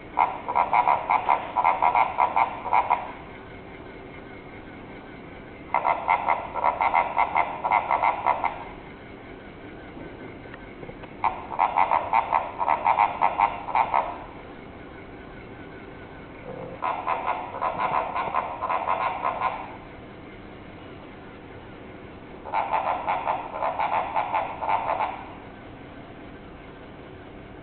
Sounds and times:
Oink: 0.2 - 3.0, 5.8 - 8.6, 11.2 - 14.2, 16.4 - 19.7, 22.5 - 25.3.

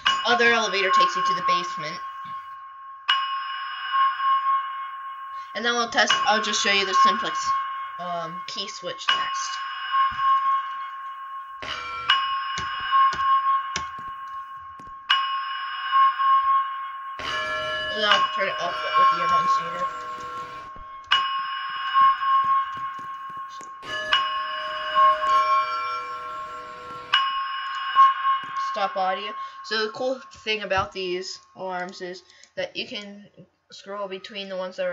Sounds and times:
Speech: 0.1 - 2.0, 5.6 - 9.6, 17.9 - 20.0, 28.6 - 34.9
Music: 17.0 - 28.8.

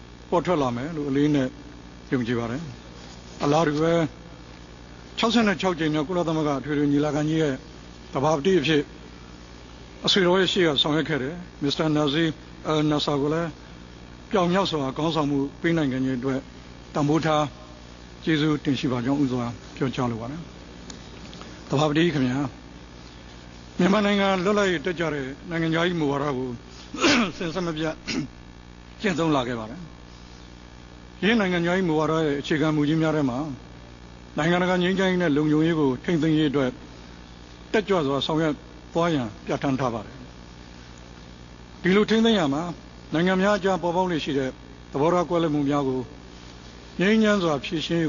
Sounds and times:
Narration, monologue: 0.0 - 48.0.

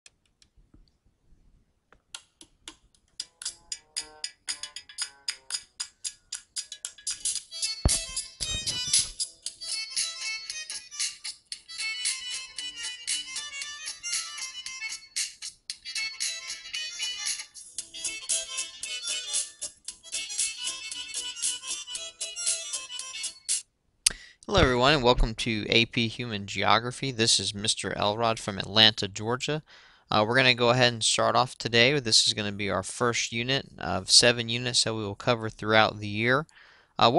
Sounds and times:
Music: 3.2 - 23.6.

